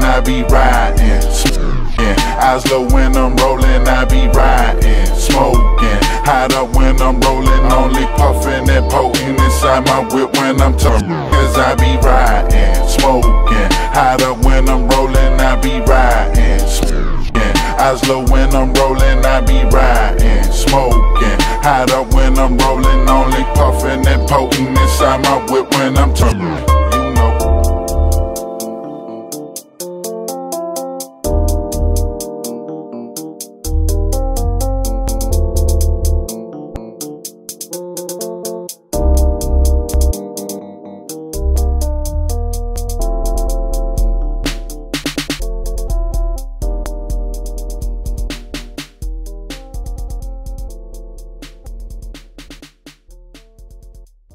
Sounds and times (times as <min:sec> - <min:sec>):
Hip hop music: 0:00.0 - 0:54.3.